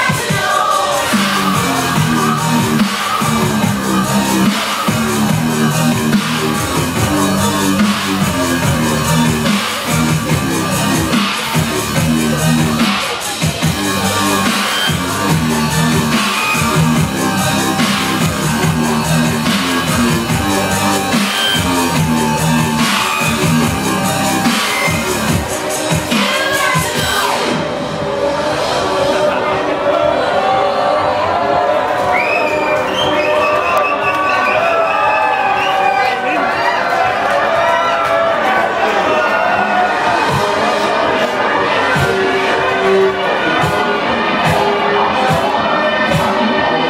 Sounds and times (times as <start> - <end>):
Dubstep: 0.0 - 29.8.